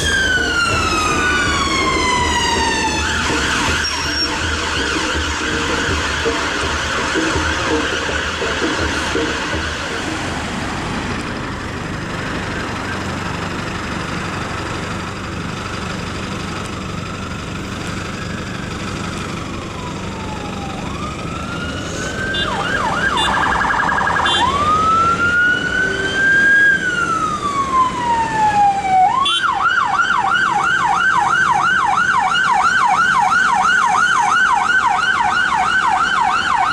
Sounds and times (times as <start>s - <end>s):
Police car (siren): 0.0s - 10.8s, 17.2s - 36.7s
Ambulance (siren): 0.0s - 13.6s, 16.8s - 36.7s.